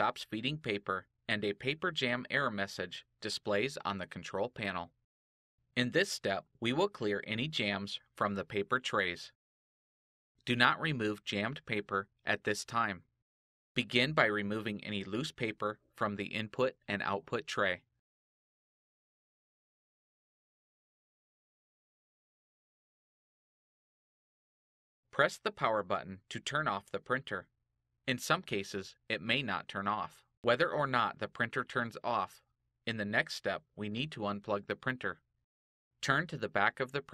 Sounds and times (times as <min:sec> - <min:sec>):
Speech: 0:00.0 - 0:05.0, 0:05.8 - 0:09.4, 0:10.4 - 0:13.1, 0:13.8 - 0:17.9, 0:25.2 - 0:27.5, 0:28.1 - 0:35.2, 0:36.0 - 0:37.1.